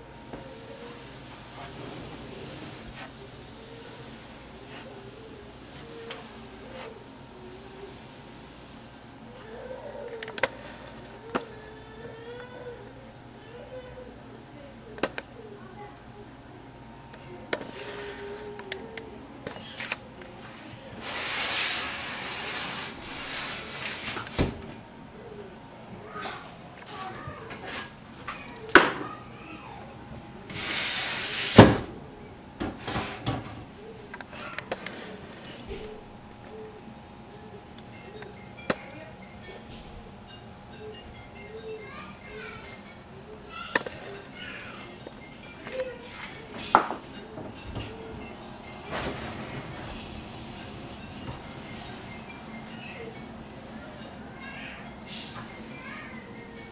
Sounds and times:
Inside, small room: 0.0 - 56.7.

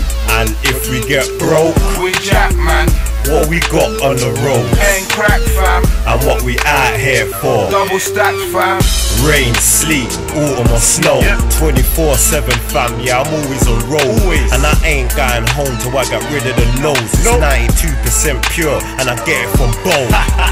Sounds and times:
Music: 0.0 - 20.5.

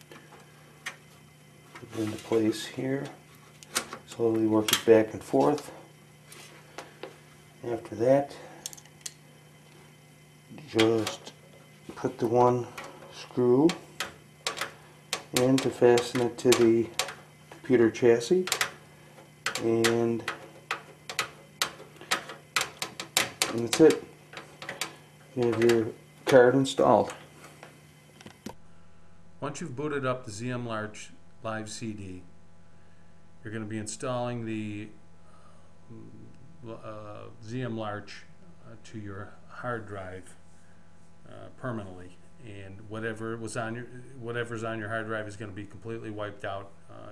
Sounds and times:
Inside, small room: 0.0 - 47.1
Speech: 1.8 - 3.2, 4.1 - 5.8, 7.6 - 8.5, 10.5 - 11.3, 11.9 - 13.8, 15.3 - 17.0, 17.6 - 18.5, 19.6 - 20.3, 23.5 - 24.1, 25.4 - 27.2, 29.4 - 32.3, 33.4 - 35.0, 35.9 - 40.4, 41.2 - 47.1.

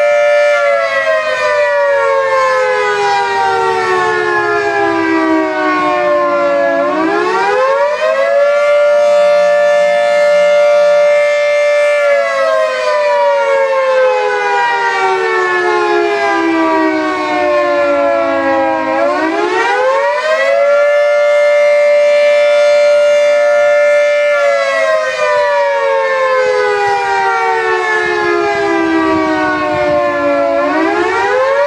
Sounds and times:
Civil defense siren: 0.0 - 31.6.

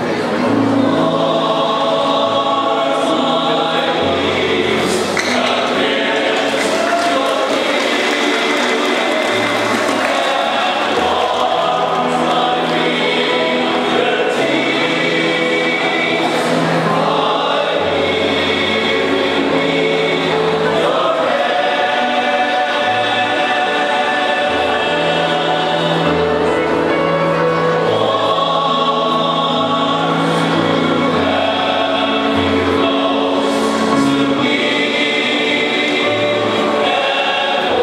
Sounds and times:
Choir: 0.0 - 37.8.

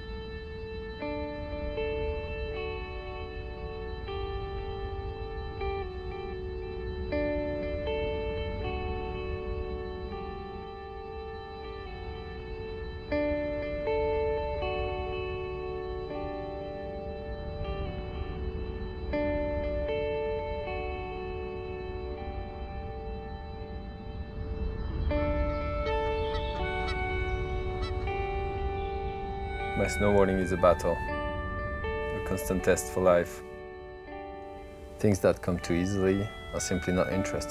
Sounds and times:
Music: 0.0 - 37.5.

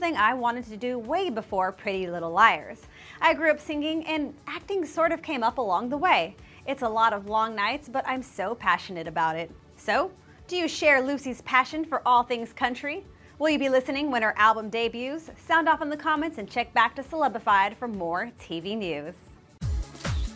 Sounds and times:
Speech: 0.0 - 19.2
Music: 0.0 - 20.3.

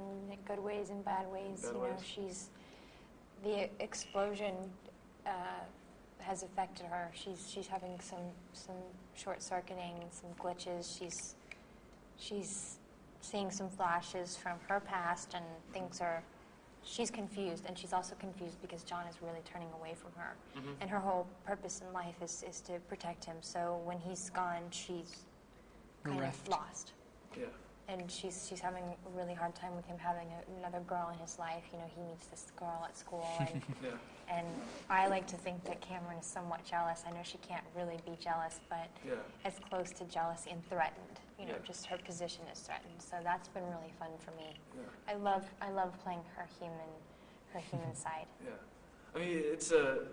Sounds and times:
Speech: 0.0 - 2.5, 12.2 - 16.3, 16.9 - 25.2, 26.0 - 47.0, 49.2 - 50.1.

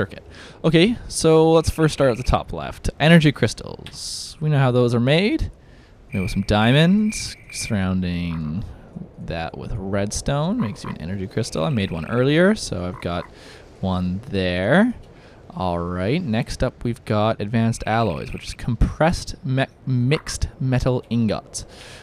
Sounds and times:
Speech: 0.0 - 21.8.

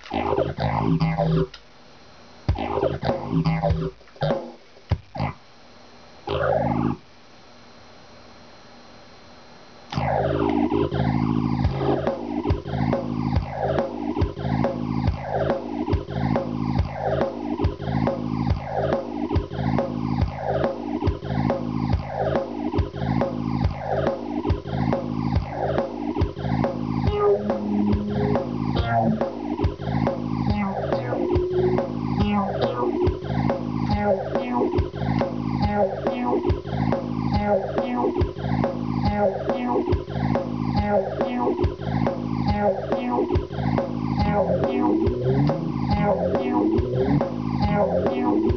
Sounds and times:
Sampler: 0.0 - 1.6, 2.5 - 5.4, 9.9 - 48.5.

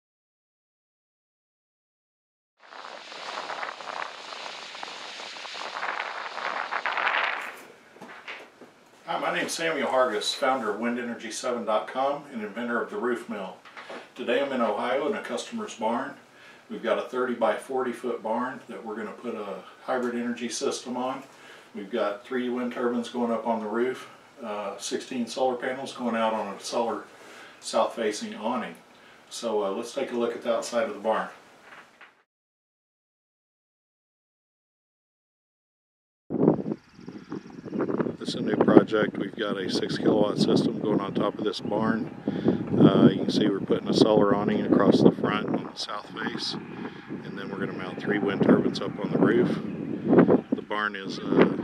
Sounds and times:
Speech: 9.1 - 13.6, 14.2 - 31.4, 38.2 - 42.1, 42.7 - 46.6, 47.2 - 49.7, 50.6 - 51.6.

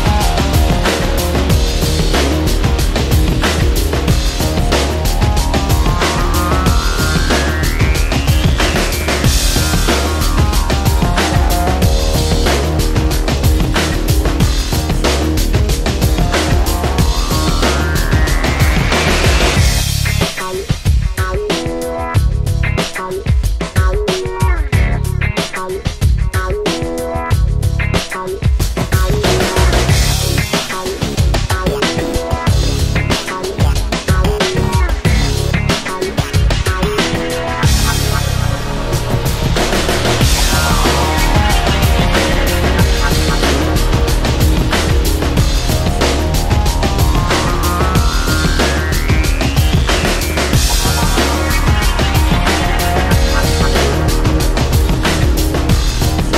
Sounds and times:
Soul music: 0.0 - 56.3.

